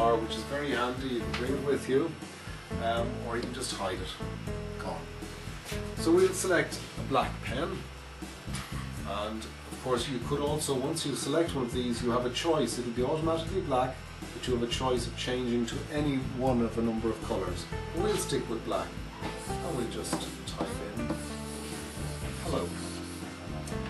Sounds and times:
Speech: 0.0s - 2.2s, 2.8s - 4.2s, 6.0s - 7.9s, 9.0s - 19.0s, 19.6s - 21.0s, 22.4s - 23.0s
Music: 0.0s - 23.8s.

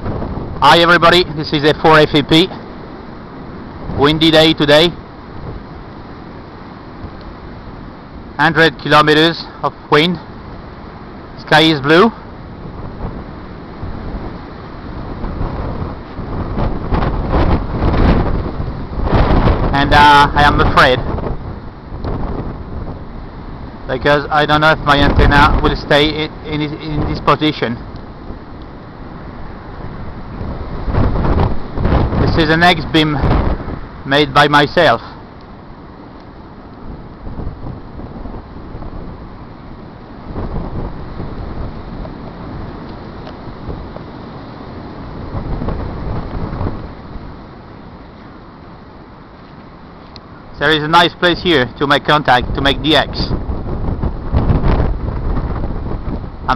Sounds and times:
Wind noise (microphone): 0.0s - 2.5s, 3.8s - 5.8s, 12.5s - 28.6s, 29.3s - 35.1s, 36.8s - 39.4s, 40.2s - 47.4s, 50.9s - 56.5s
Speech: 0.6s - 2.6s, 4.0s - 5.0s, 8.4s - 10.2s, 11.4s - 12.2s, 19.7s - 21.1s, 23.9s - 27.8s, 32.2s - 33.2s, 34.1s - 35.2s, 50.6s - 53.4s.

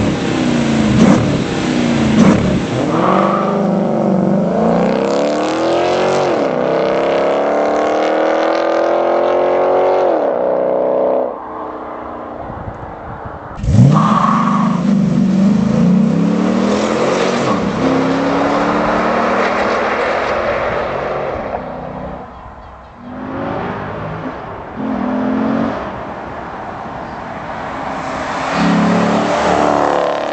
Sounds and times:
Outside, urban or manmade: 0.0s - 30.3s.

